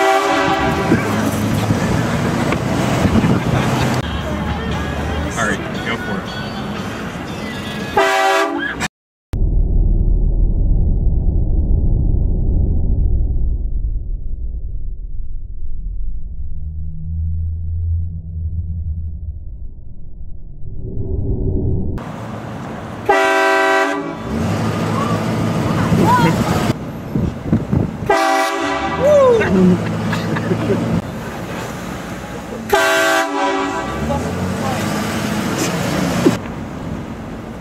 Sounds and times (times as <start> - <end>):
Train horn: 0.0 - 1.1, 8.0 - 8.9, 23.1 - 24.3, 28.1 - 29.2, 32.7 - 34.1
Wind noise (microphone): 0.5 - 3.7, 25.9 - 28.1.